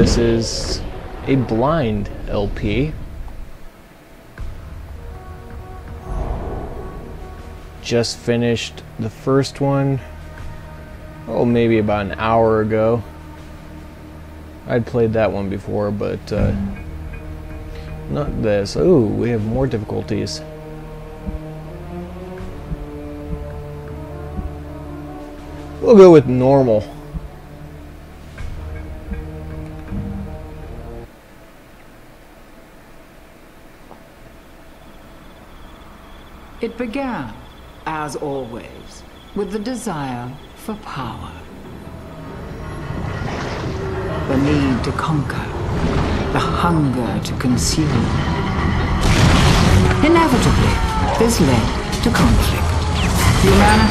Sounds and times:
Music: 0.0s - 53.9s.

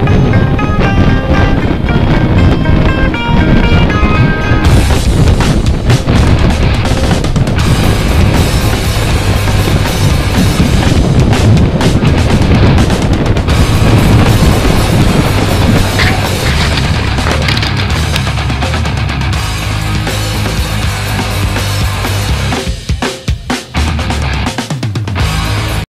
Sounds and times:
Music: 0.0s - 25.8s.

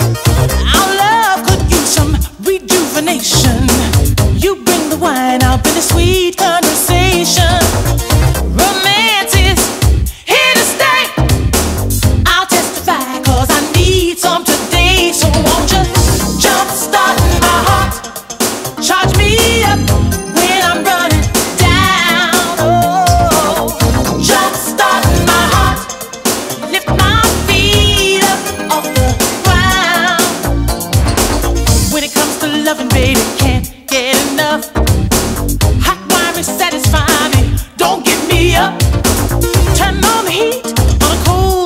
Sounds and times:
Soul music: 0.0s - 41.6s
Singing: 10.3s - 11.2s, 12.3s - 18.2s, 20.4s - 26.0s, 35.9s - 38.8s.

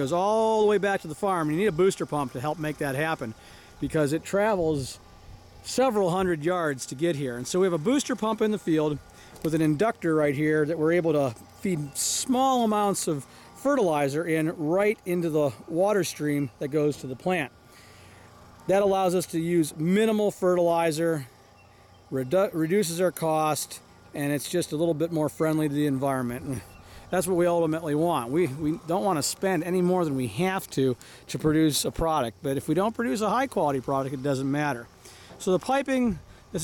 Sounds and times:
Speech: 0.0s - 5.0s, 5.6s - 17.5s, 18.7s - 21.3s, 22.1s - 36.6s.

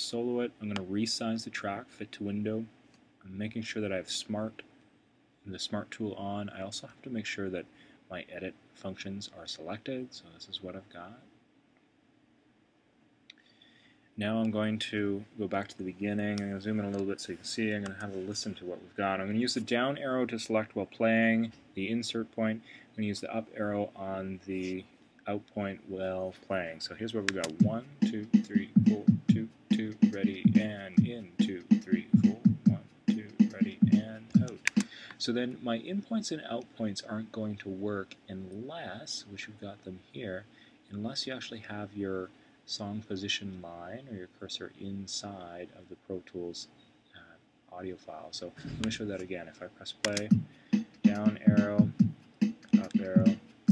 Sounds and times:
Speech: 0.0s - 4.7s, 5.5s - 11.3s, 14.2s - 50.4s, 51.1s - 52.0s, 52.8s - 53.4s.

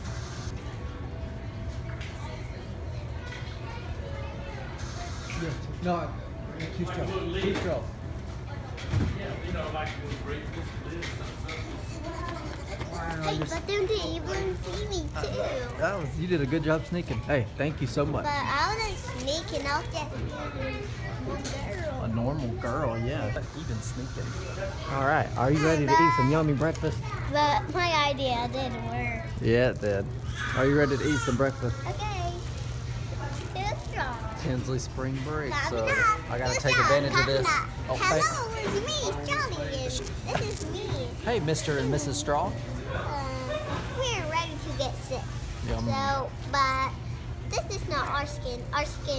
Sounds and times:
Inside, public space: 0.0s - 49.1s
Child speech, kid speaking: 2.1s - 4.8s, 11.9s - 16.1s, 18.0s - 23.4s, 25.3s - 29.4s, 30.4s - 32.6s, 33.2s - 34.4s, 35.2s - 42.3s, 42.9s - 49.1s.

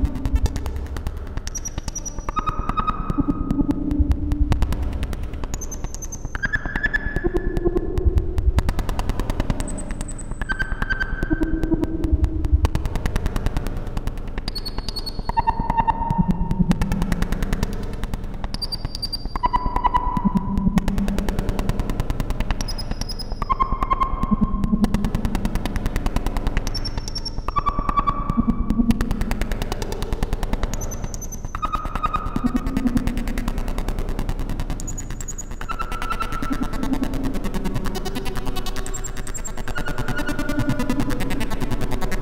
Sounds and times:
Synthesizer: 0.0s - 42.2s.

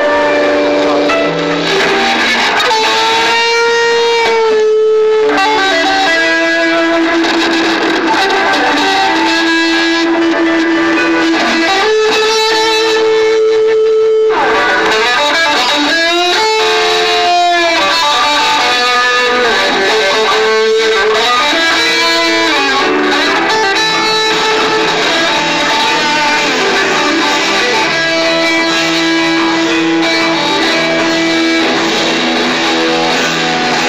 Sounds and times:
Music: 0.0s - 33.8s.

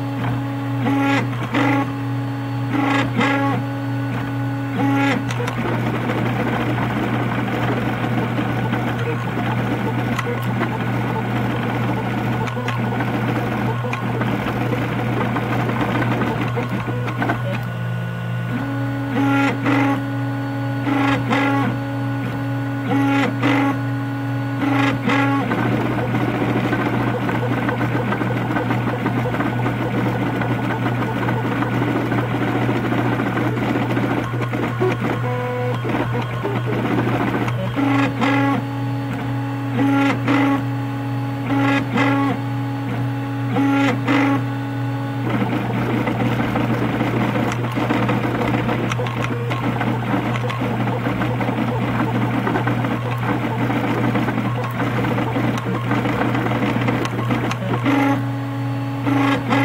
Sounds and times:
Printer: 0.0s - 59.6s.

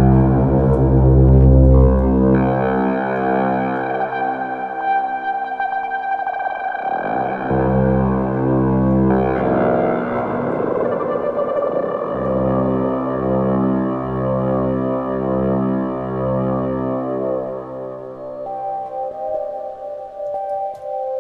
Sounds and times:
Synthesizer: 0.0s - 21.2s.

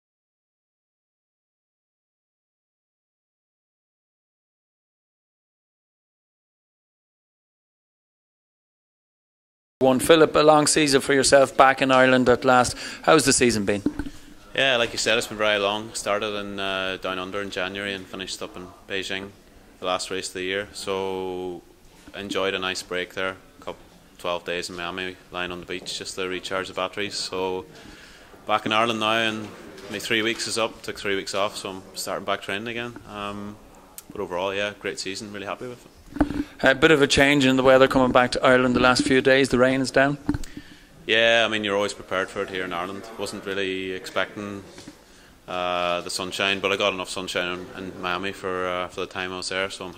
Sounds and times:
Speech: 9.8s - 27.7s, 28.5s - 35.9s, 36.6s - 40.2s, 41.1s - 44.9s, 45.5s - 49.9s.

